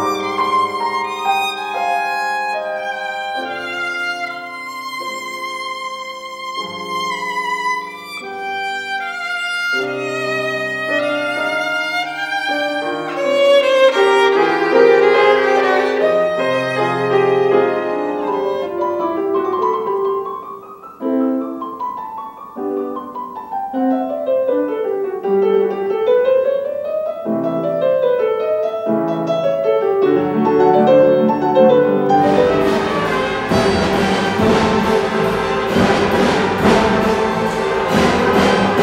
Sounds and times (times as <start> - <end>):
Classical music: 0.0 - 38.8.